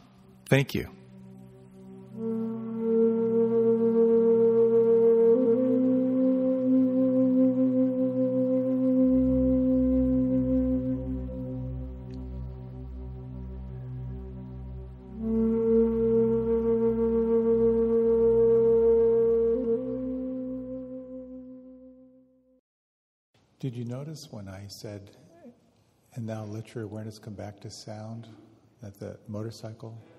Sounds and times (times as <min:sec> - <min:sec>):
Music: 0:00.0 - 0:22.6
Male speech, man speaking: 0:00.5 - 0:01.0, 0:23.6 - 0:30.1.